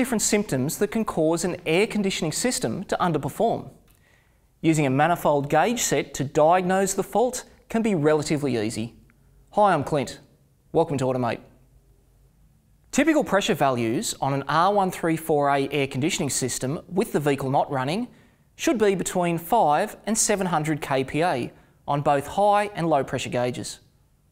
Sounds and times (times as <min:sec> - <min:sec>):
Speech: 0:00.0 - 0:03.8, 0:04.6 - 0:11.6, 0:12.9 - 0:23.9.